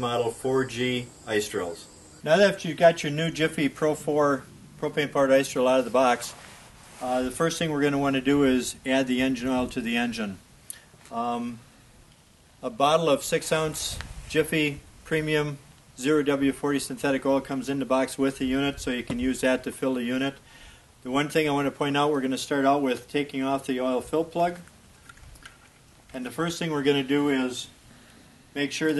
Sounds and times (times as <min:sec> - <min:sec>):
Speech: 0:00.0 - 0:06.4, 0:07.0 - 0:10.4, 0:11.1 - 0:11.6, 0:12.6 - 0:20.4, 0:21.0 - 0:24.7, 0:26.1 - 0:27.8, 0:28.6 - 0:28.9.